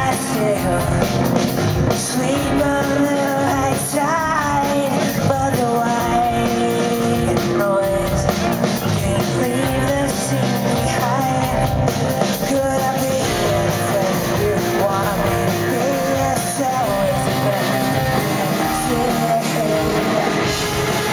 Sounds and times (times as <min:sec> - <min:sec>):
Singing: 0:00.0 - 0:01.3, 0:01.9 - 0:21.1
Rock music: 0:00.0 - 0:21.1.